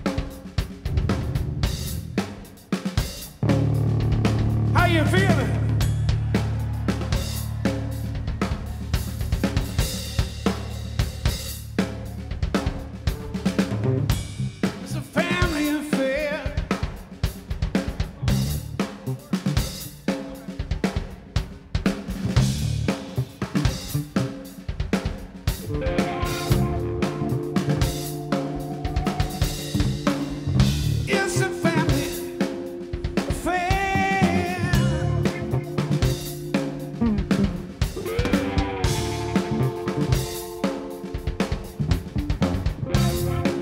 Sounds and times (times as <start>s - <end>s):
Blues: 0.0s - 43.6s
Speech: 4.7s - 5.8s, 14.8s - 16.6s, 18.0s - 21.3s, 31.1s - 32.3s, 33.3s - 35.8s.